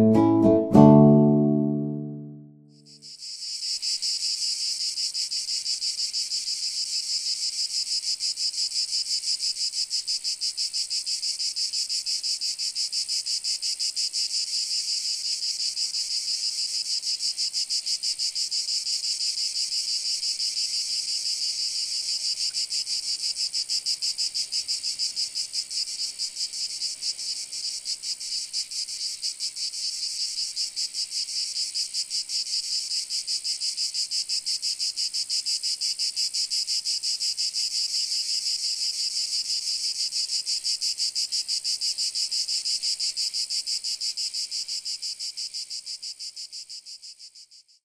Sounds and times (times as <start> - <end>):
Cricket: 2.8 - 47.8.